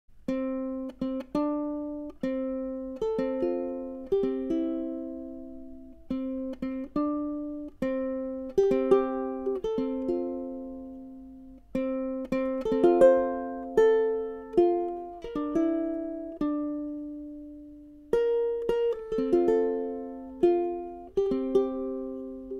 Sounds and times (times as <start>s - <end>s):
Ukulele: 0.1s - 22.5s
Guitar: 0.2s - 22.5s.